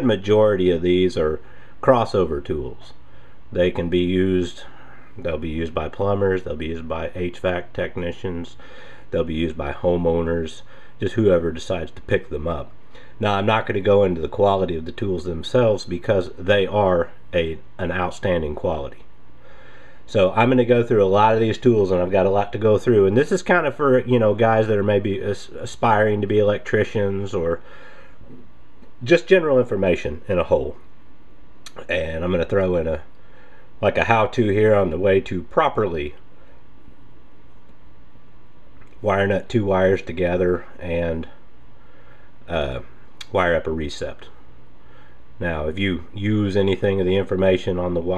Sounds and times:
Speech: 0:00.0 - 0:19.1, 0:20.1 - 0:27.6, 0:29.0 - 0:30.8, 0:31.7 - 0:33.1, 0:33.8 - 0:36.2, 0:39.0 - 0:41.4, 0:42.5 - 0:44.4, 0:45.4 - 0:48.1.

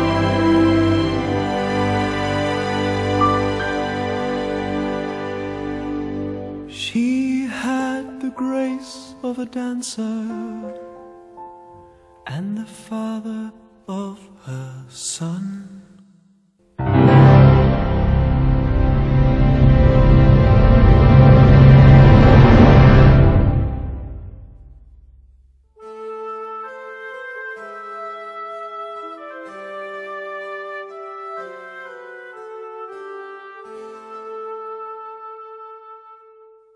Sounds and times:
Theme music: 0:00.0 - 0:06.8, 0:16.8 - 0:24.9.

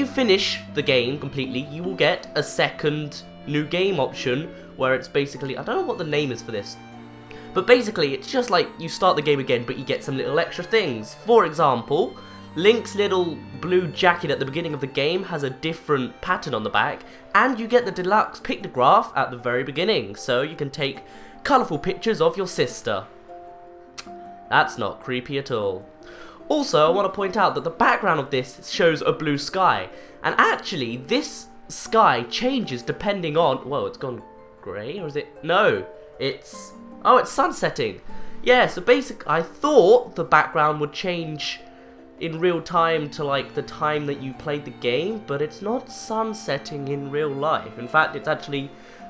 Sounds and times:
Speech: 0:00.0 - 0:06.8, 0:07.6 - 0:23.1, 0:24.5 - 0:25.9, 0:26.5 - 0:41.6, 0:42.2 - 0:48.7
Music: 0:00.0 - 0:49.1.

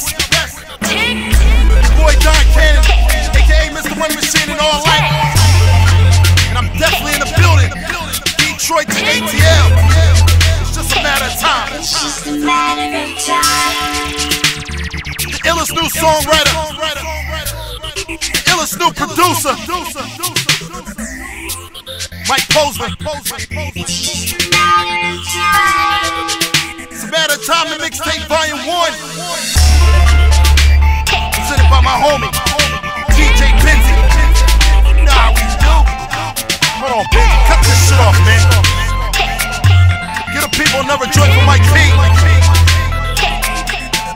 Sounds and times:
Music: 0:00.0 - 0:44.1.

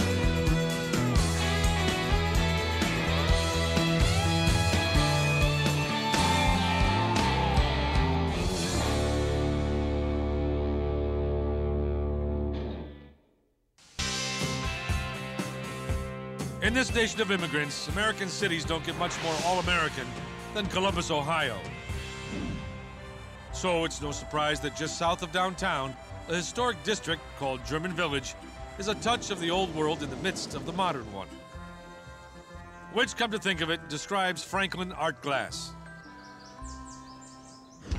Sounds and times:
Music: 0:00.0 - 0:37.9
Speech: 0:16.6 - 0:21.7, 0:23.5 - 0:31.4, 0:33.0 - 0:35.7.

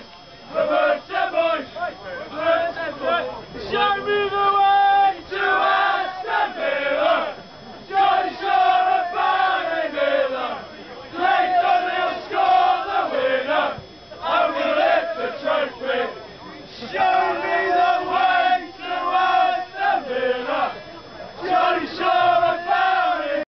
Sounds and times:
Choir: 0:00.0 - 0:23.5
Speech: 0:14.1 - 0:19.2.

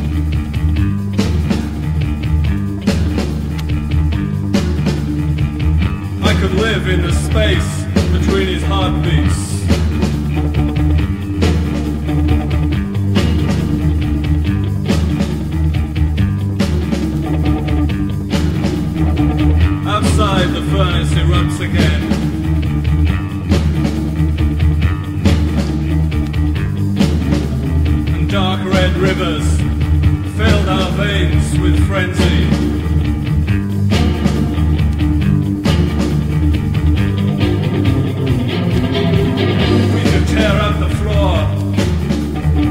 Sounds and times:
Psychedelic rock: 0:00.0 - 0:42.7.

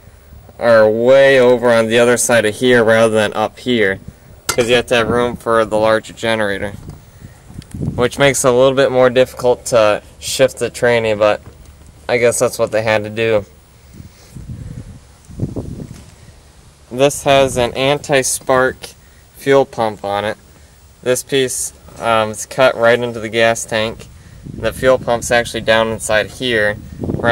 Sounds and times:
Speech: 0:00.6 - 0:06.8, 0:08.0 - 0:11.4, 0:12.1 - 0:13.5, 0:16.9 - 0:20.4, 0:21.0 - 0:27.3.

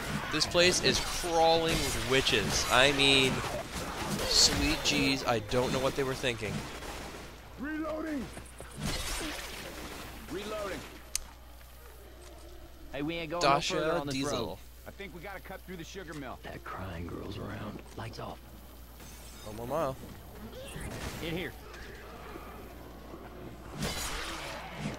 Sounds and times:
Speech: 0:04.3 - 0:06.6.

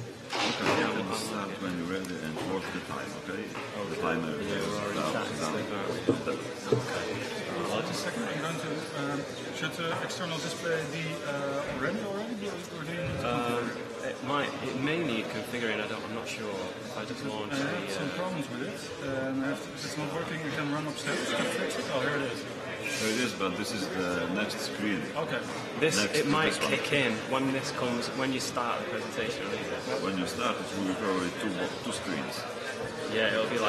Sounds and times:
Speech: 0:00.4 - 0:33.6.

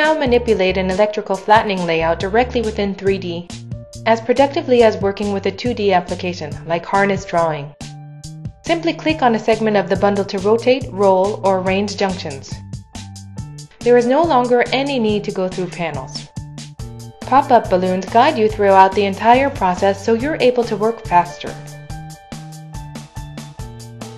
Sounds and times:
Speech: 0:00.0 - 0:03.5, 0:04.1 - 0:07.8, 0:08.7 - 0:12.6, 0:13.8 - 0:16.3, 0:17.3 - 0:21.7
Music: 0:00.0 - 0:24.1.

